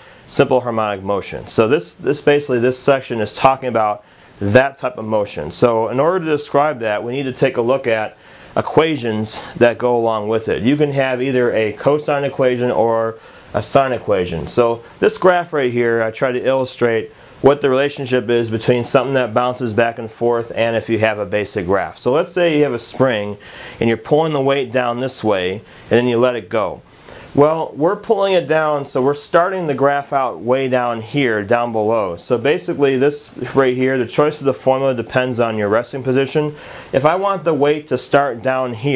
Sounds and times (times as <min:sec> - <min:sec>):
Speech: 0:00.0 - 0:38.9.